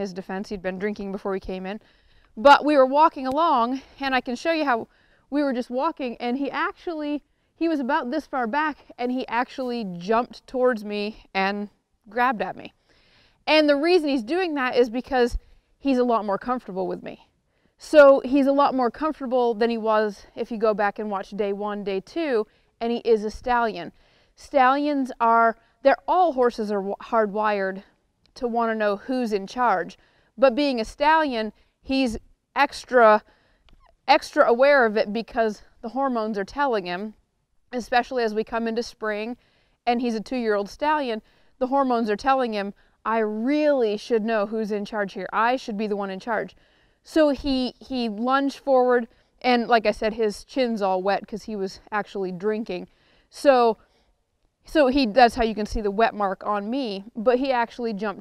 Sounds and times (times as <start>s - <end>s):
Speech: 0.0s - 1.8s, 2.4s - 12.7s, 13.5s - 17.2s, 17.8s - 33.2s, 34.1s - 37.2s, 37.8s - 53.8s, 54.7s - 58.2s.